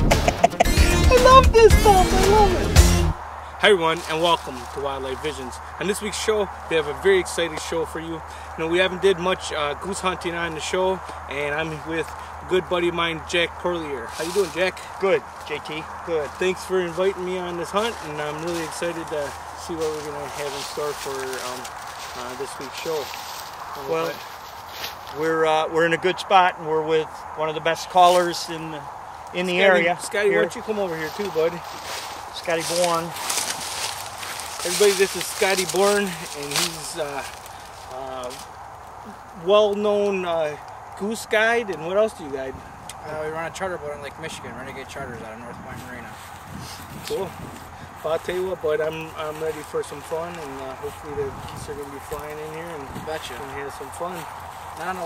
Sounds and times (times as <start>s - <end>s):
Music: 0.0s - 3.2s
Speech: 1.1s - 2.7s, 3.6s - 24.2s, 25.1s - 31.7s, 32.4s - 33.2s, 34.6s - 38.4s, 39.4s - 46.2s, 47.0s - 47.4s, 48.0s - 55.0s.